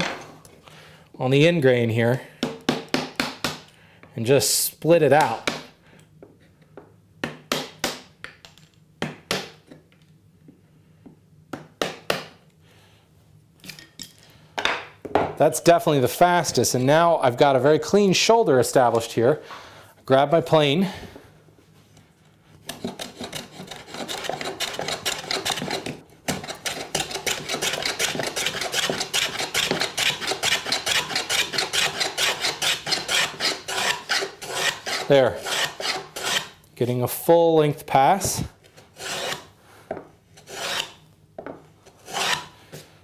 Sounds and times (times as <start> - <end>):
Filing (rasp): 22.7 - 36.6, 39.0 - 39.5, 40.4 - 41.0, 41.9 - 42.6.